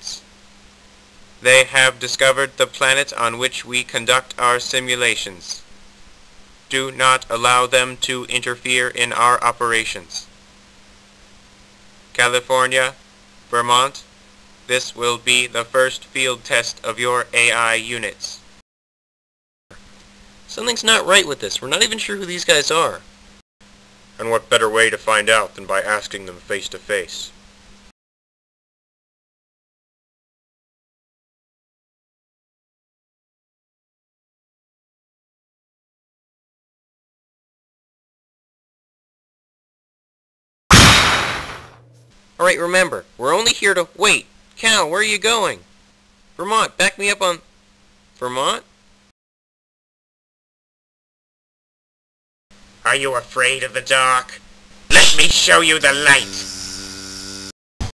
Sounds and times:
Speech: 0.0 - 0.3, 1.4 - 5.7, 6.7 - 10.3, 12.2 - 14.1, 14.7 - 18.5, 20.5 - 23.0, 24.2 - 27.4, 42.4 - 45.6, 46.4 - 47.4, 48.2 - 48.7, 52.8 - 56.5.

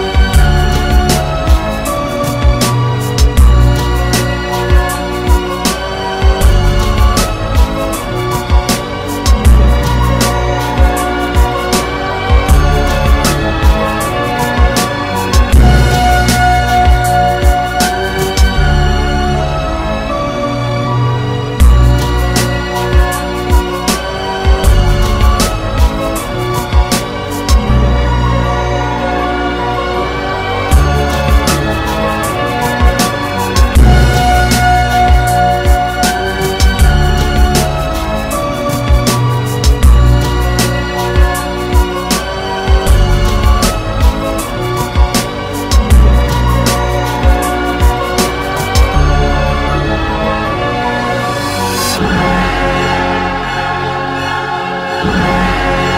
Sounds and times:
Music: 0.0 - 55.9.

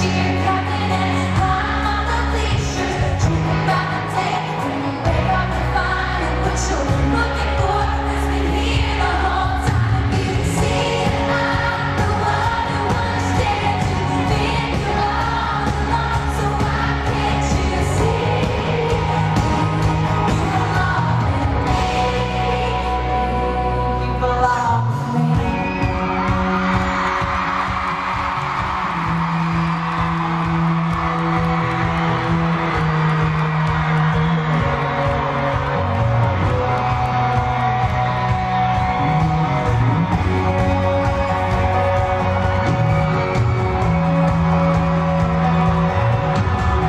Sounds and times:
Music: 0.0 - 46.8.

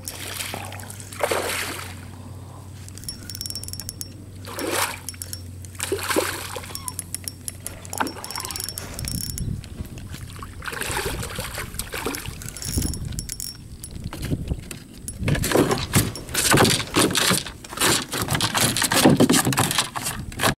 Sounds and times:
Rowboat, canoe, kayak: 0.0 - 20.5
Sailboat, sailing ship: 0.0 - 20.5.

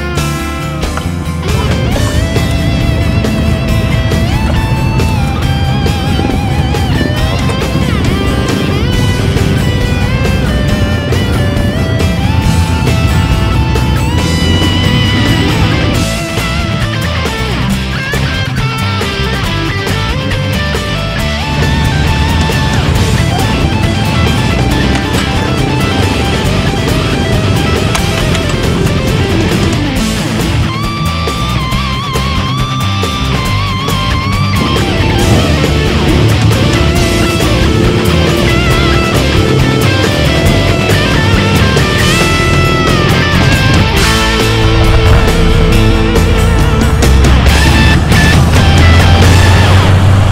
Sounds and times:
Music: 0.0 - 50.3.

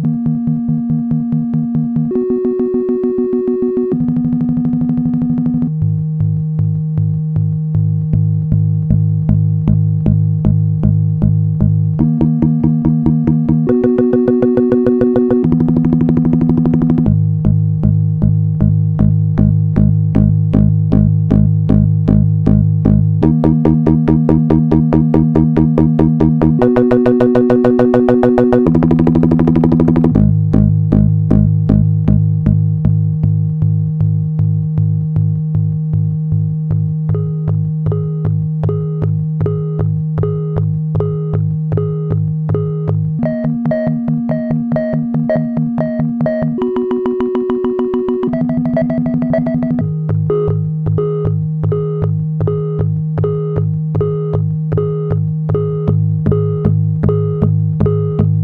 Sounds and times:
Music: 0.0 - 58.4.

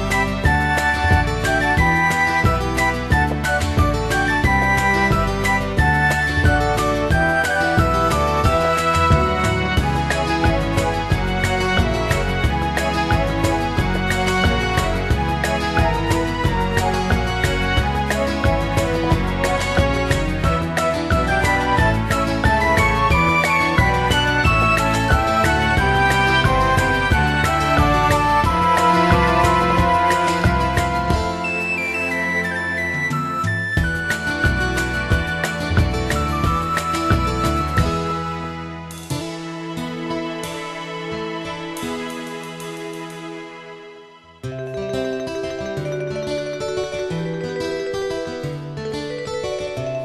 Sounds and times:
Video game music: 0.0 - 43.2, 44.4 - 50.0.

